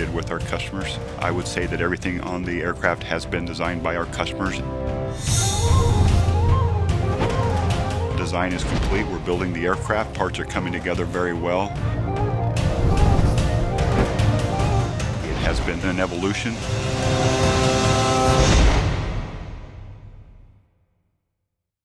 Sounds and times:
Speech: 0.0s - 4.6s, 8.2s - 11.8s, 15.2s - 16.6s
Music: 0.0s - 20.9s.

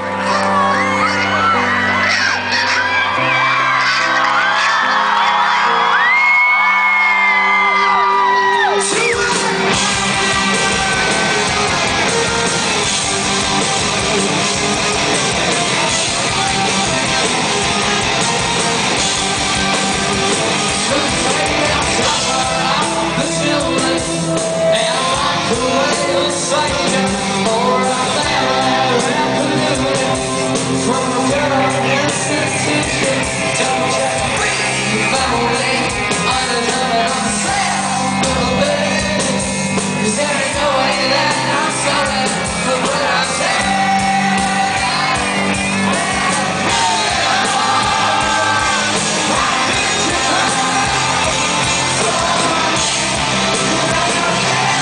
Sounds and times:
Rhythm and blues: 0.0s - 54.8s.

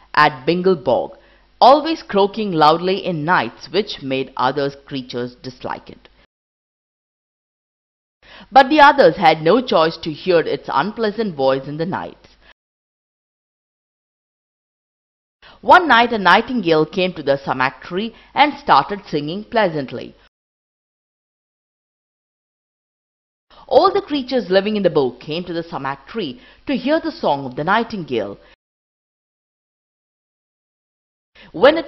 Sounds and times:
Speech: 0.2s - 6.1s, 8.5s - 12.2s, 15.6s - 20.2s, 23.7s - 28.4s, 31.5s - 31.8s.

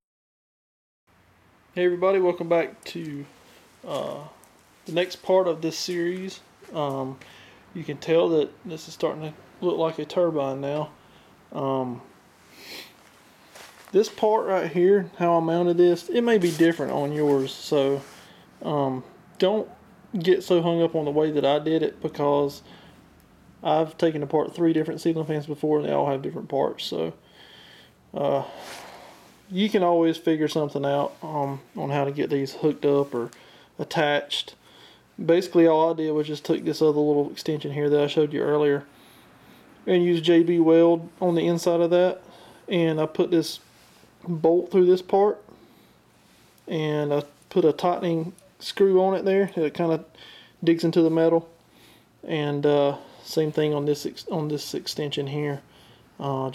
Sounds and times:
Speech: 1.8s - 7.2s, 7.8s - 12.1s, 13.9s - 22.7s, 23.6s - 27.2s, 28.1s - 28.6s, 29.5s - 34.6s, 35.2s - 38.9s, 39.9s - 43.6s, 44.2s - 45.5s, 46.7s - 51.5s, 52.2s - 56.5s.

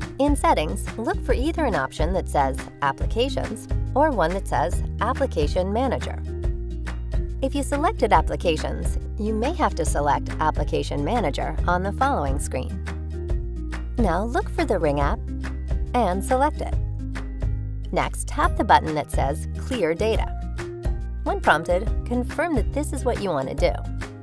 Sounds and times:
Music: 0.0s - 24.2s
Speech: 0.2s - 6.2s, 7.4s - 12.7s, 14.0s - 15.2s, 16.0s - 16.8s, 17.9s - 20.3s, 21.3s - 23.8s.

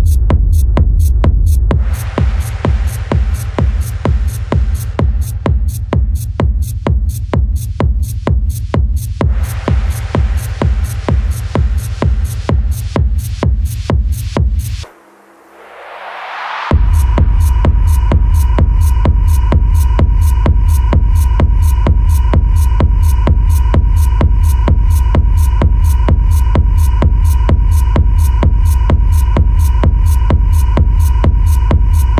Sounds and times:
Techno: 0.0s - 32.1s.

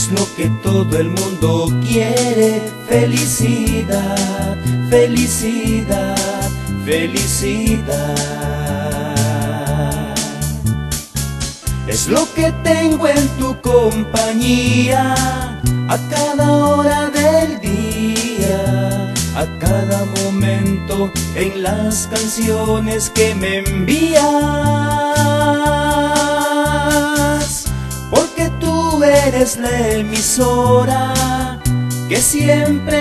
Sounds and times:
Music: 0.0s - 33.0s.

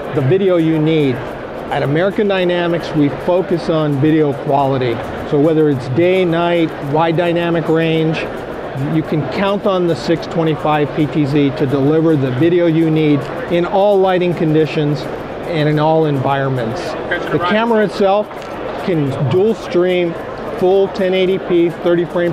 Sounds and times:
Music: 0.0s - 22.3s
Speech: 0.2s - 22.3s.

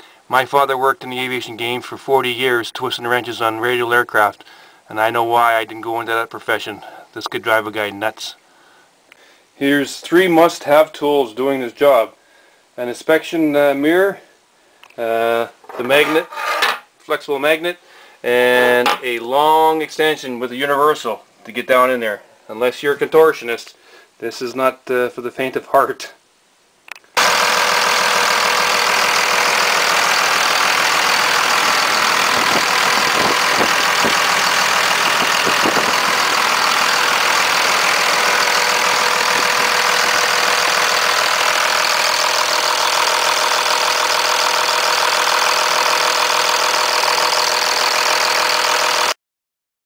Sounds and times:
Speech: 0.3s - 8.4s, 9.6s - 12.2s, 12.8s - 14.3s, 15.0s - 16.3s, 17.0s - 26.2s
Motor vehicle (road): 27.2s - 49.1s
Engine: 27.2s - 49.2s.

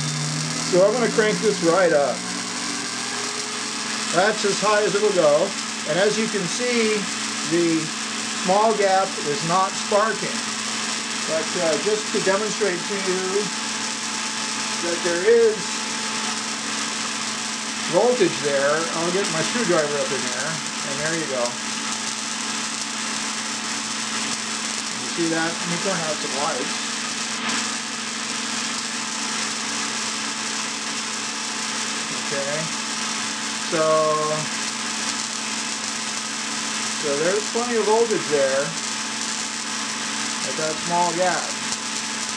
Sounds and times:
Speech: 0.7s - 2.2s, 4.2s - 10.4s, 11.3s - 13.5s, 14.8s - 15.7s, 17.9s - 21.6s, 25.0s - 26.7s, 32.1s - 32.7s, 33.7s - 34.5s, 37.0s - 38.8s, 40.4s - 41.6s.

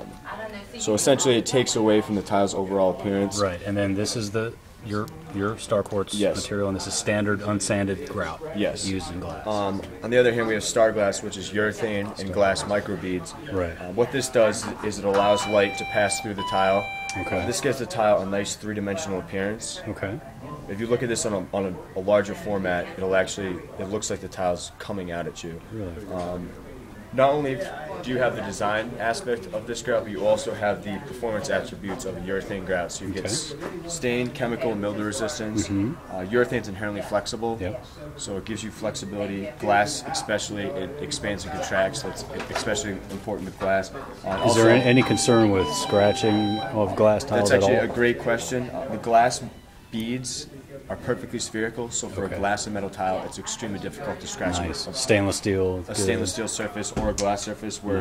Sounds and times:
Speech: 0.0s - 58.0s.

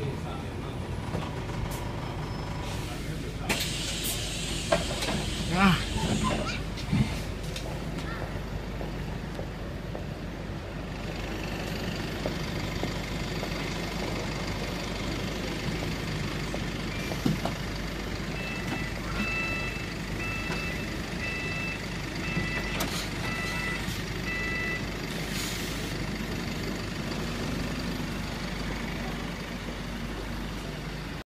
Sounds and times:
Vehicle: 0.0s - 31.2s.

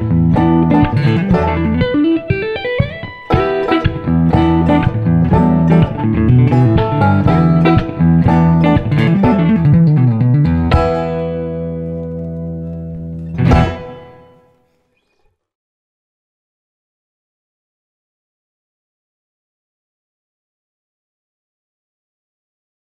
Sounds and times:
Guitar: 0.0s - 15.1s.

